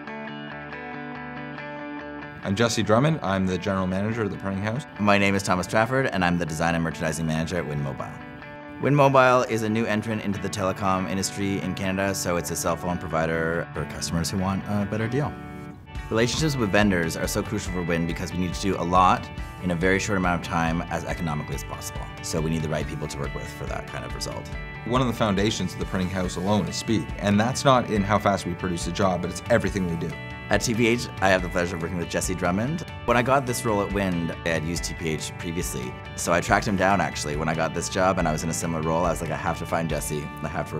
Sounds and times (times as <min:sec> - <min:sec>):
Music: 0:00.0 - 0:40.7
Speech: 0:02.4 - 0:08.2, 0:08.8 - 0:15.4, 0:16.1 - 0:40.7.